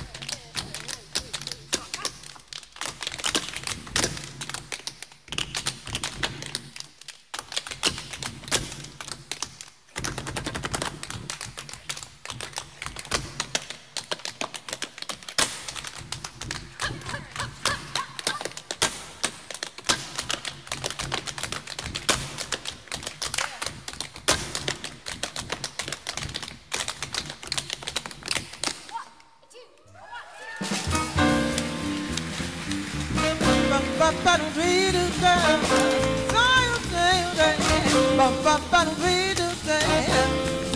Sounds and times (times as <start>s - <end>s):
Music: 30.6s - 40.7s.